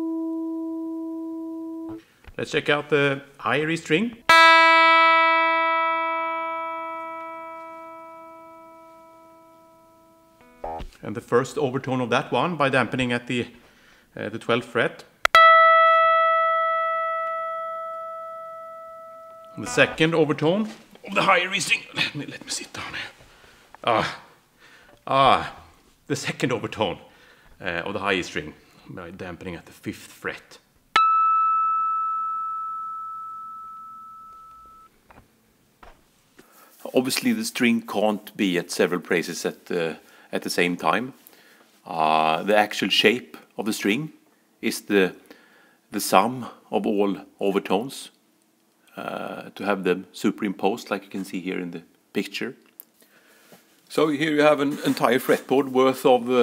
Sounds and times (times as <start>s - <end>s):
Speech: 2.4s - 4.2s, 11.0s - 13.6s, 14.2s - 15.1s, 19.6s - 23.2s, 23.8s - 24.3s, 25.1s - 30.7s, 36.8s - 41.2s, 41.9s - 45.2s, 45.9s - 48.2s, 48.9s - 52.6s, 53.9s - 56.4s.